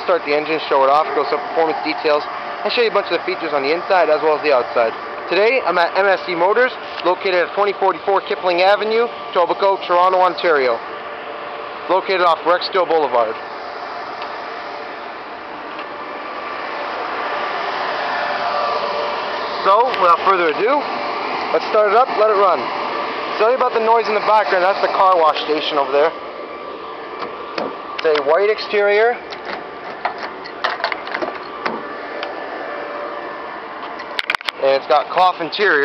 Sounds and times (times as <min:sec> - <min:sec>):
Speech: 0:00.0 - 0:10.8, 0:11.9 - 0:13.4, 0:19.6 - 0:20.9, 0:21.5 - 0:22.7, 0:23.4 - 0:26.2, 0:28.0 - 0:29.2, 0:34.6 - 0:35.8
Car: 0:00.0 - 0:35.8.